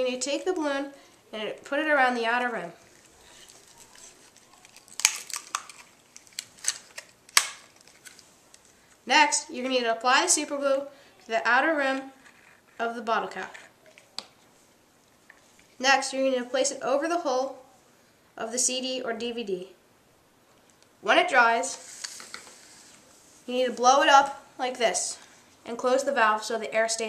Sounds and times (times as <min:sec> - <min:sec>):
Speech: 0:00.0 - 0:02.8, 0:09.1 - 0:12.2, 0:12.8 - 0:13.7, 0:15.8 - 0:17.6, 0:18.4 - 0:19.8, 0:21.0 - 0:21.8, 0:23.5 - 0:27.0
Inside, small room: 0:00.0 - 0:27.0.